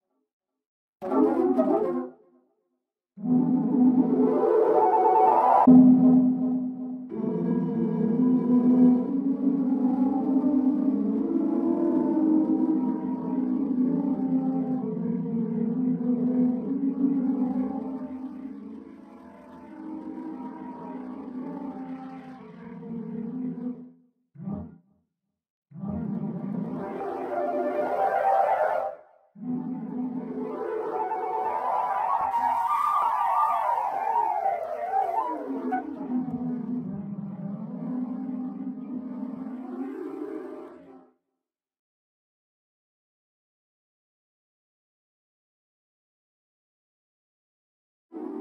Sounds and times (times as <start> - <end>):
Music: 0.0 - 41.5
Sound effect: 1.0 - 2.2, 3.2 - 25.0, 25.7 - 41.2.